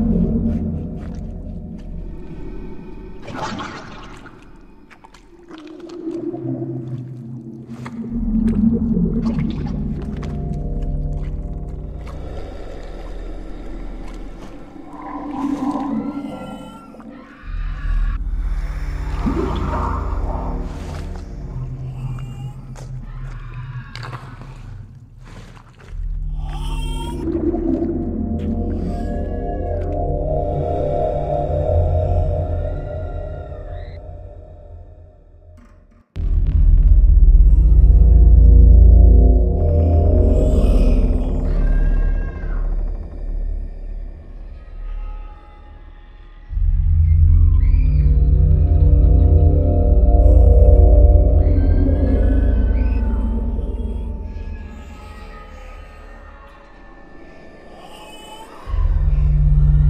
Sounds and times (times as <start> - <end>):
Ambient music: 0.0 - 59.8.